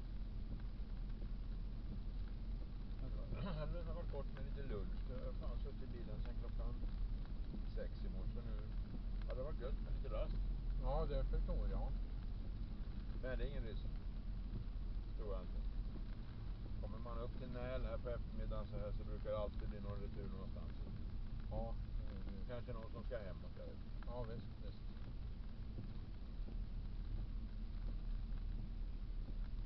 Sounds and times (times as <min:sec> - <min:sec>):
Vehicle: 0:00.0 - 0:29.6
Speech: 0:03.0 - 0:06.9, 0:07.7 - 0:12.0, 0:13.2 - 0:14.0, 0:15.2 - 0:15.5, 0:16.8 - 0:20.8, 0:21.5 - 0:24.8.